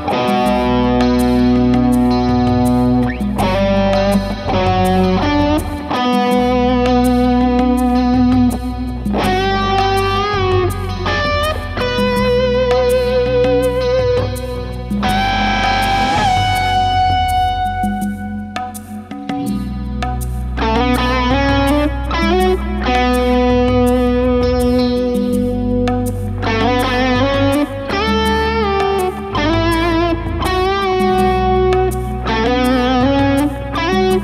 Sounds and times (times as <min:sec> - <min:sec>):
Strum: 0:00.0 - 0:34.2.